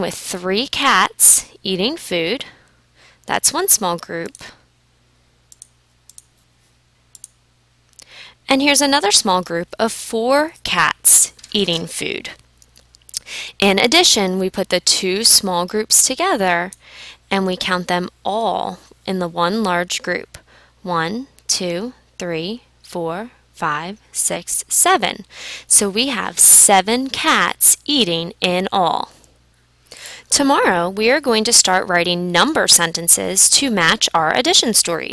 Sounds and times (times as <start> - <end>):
Speech: 0.0 - 2.5, 3.3 - 4.6, 8.5 - 12.4, 13.6 - 29.2, 30.3 - 35.1.